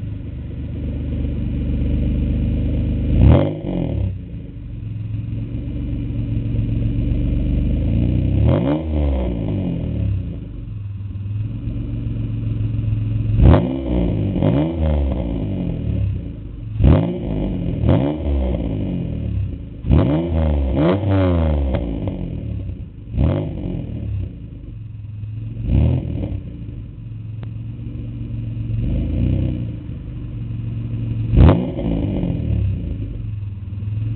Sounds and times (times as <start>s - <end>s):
Car: 0.0s - 34.1s.